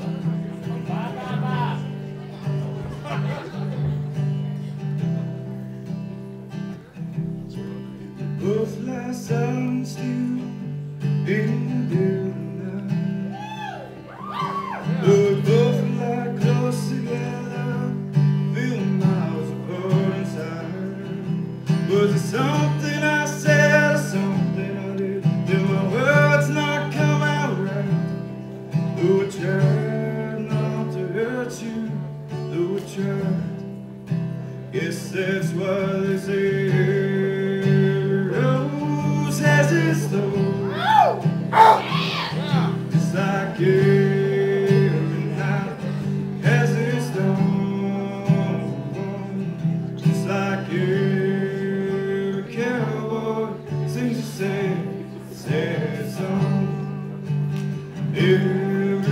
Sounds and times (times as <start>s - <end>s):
Music: 0.0s - 59.1s
Male singing: 8.4s - 13.8s, 15.0s - 28.0s, 29.0s - 33.6s, 34.7s - 40.9s, 42.5s - 57.0s, 58.1s - 59.1s.